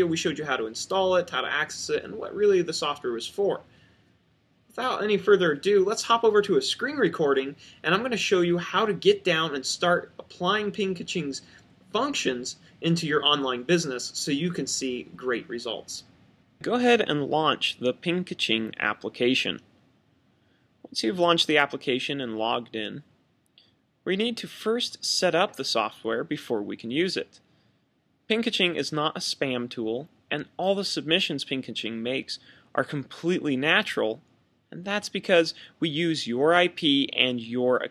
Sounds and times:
Speech: 0:00.0 - 0:03.7, 0:04.7 - 0:19.6, 0:20.9 - 0:23.1, 0:24.0 - 0:27.4, 0:28.3 - 0:37.9.

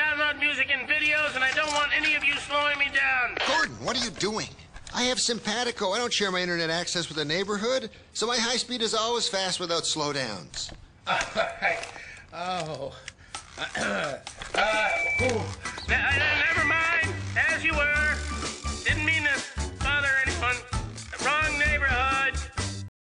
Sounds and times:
Music: 0:14.6 - 0:22.9.

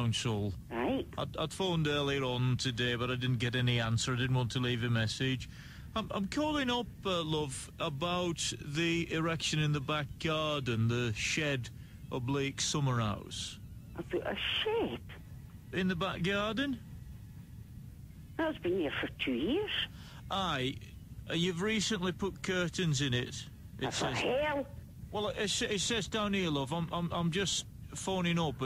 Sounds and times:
Speech: 0:00.0 - 0:15.1, 0:15.8 - 0:16.8, 0:18.4 - 0:28.6.

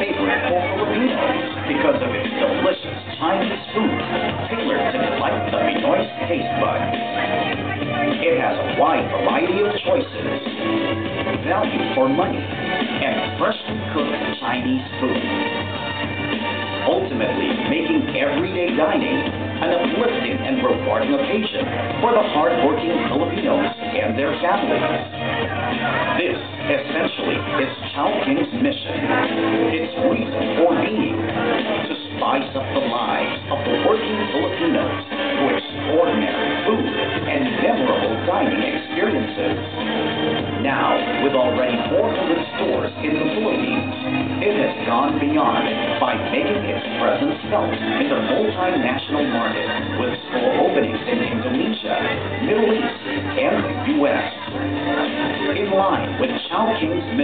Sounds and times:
Speech: 0:00.0 - 0:15.6, 0:16.8 - 0:39.6, 0:40.5 - 0:57.2
Music: 0:00.0 - 0:57.2.

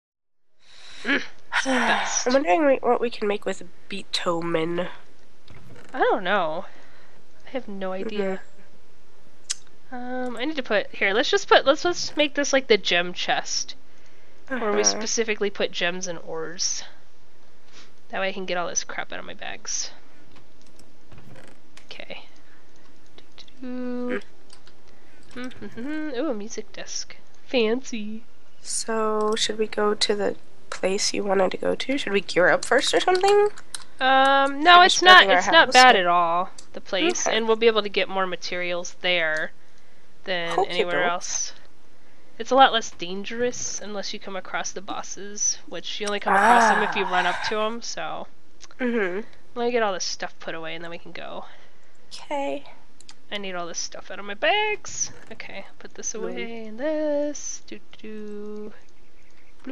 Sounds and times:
Speech: 0:01.0 - 0:05.0, 0:06.0 - 0:06.7, 0:07.5 - 0:08.4, 0:09.9 - 0:13.8, 0:14.5 - 0:17.0, 0:18.1 - 0:20.0, 0:21.9 - 0:22.3, 0:23.3 - 0:24.3, 0:25.4 - 0:39.5, 0:40.3 - 0:41.6, 0:42.4 - 0:51.5, 0:52.2 - 0:52.7, 0:53.3 - 0:58.8.

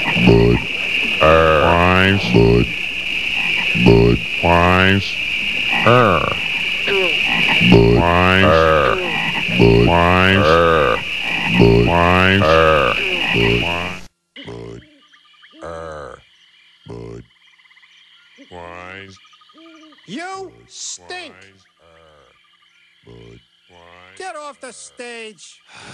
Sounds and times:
Frog: 0:00.0 - 0:24.2.

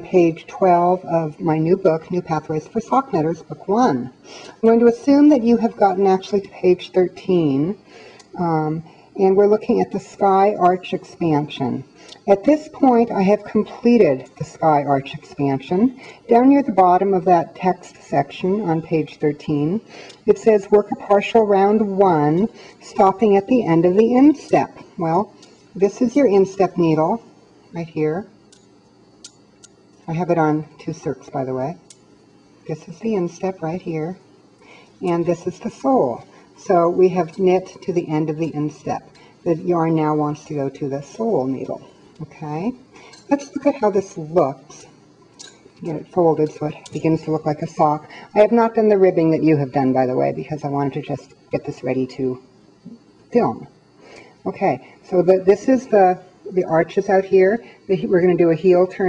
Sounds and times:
Speech: 0:00.0 - 0:07.8, 0:08.4 - 0:28.3, 0:30.1 - 0:31.8, 0:32.7 - 0:34.2, 0:35.0 - 0:44.9, 0:45.8 - 0:52.5, 0:53.3 - 0:53.7, 0:54.5 - 0:59.0.

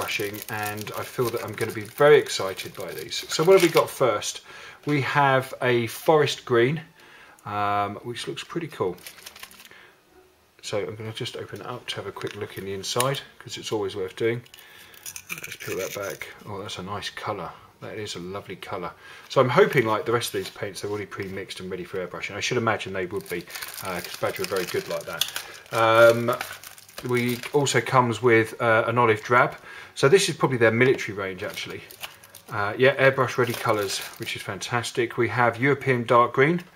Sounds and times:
Speech: 0:00.0 - 0:09.0, 0:10.6 - 0:14.5, 0:15.5 - 0:31.9, 0:32.5 - 0:36.7.

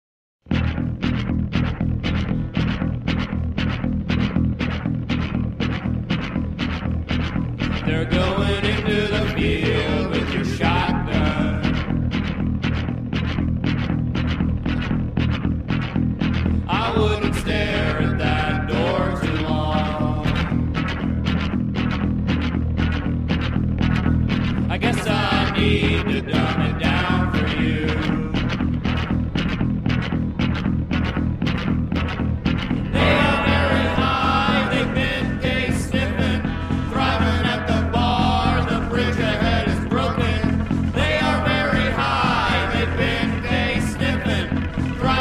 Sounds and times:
Music: 0:00.4 - 0:45.2.

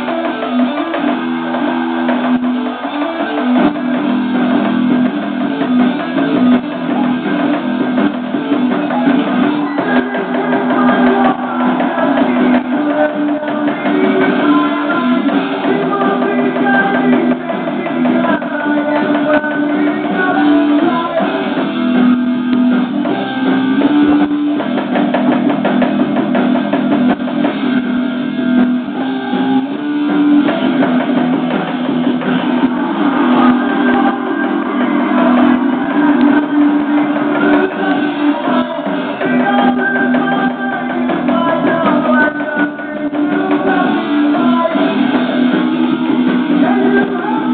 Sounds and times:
Electric guitar: 0:00.0 - 0:47.5.

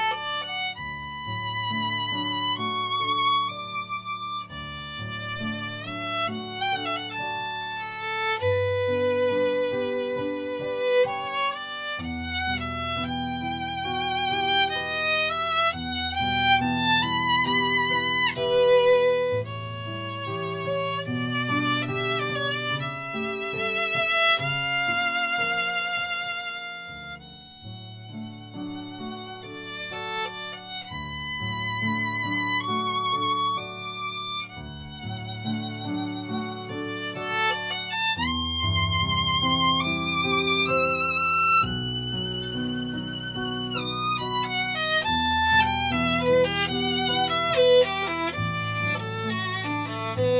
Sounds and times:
Violin, fiddle: 0:00.0 - 0:50.3.

